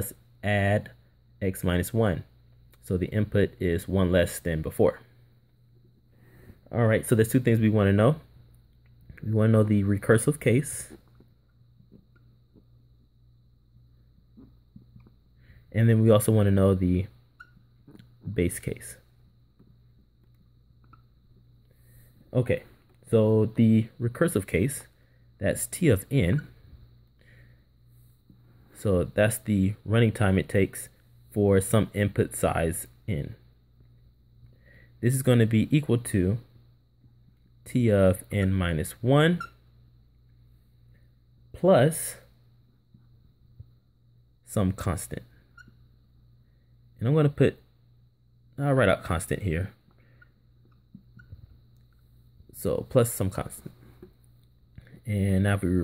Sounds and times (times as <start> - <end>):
Speech: 0.0 - 5.1, 6.7 - 8.3, 9.2 - 11.0, 15.7 - 17.2, 18.2 - 19.1, 22.3 - 26.6, 28.8 - 33.4, 35.0 - 36.5, 37.6 - 39.5, 41.5 - 42.3, 44.4 - 45.4, 47.0 - 47.7, 48.6 - 49.8, 52.5 - 53.8, 55.0 - 55.8.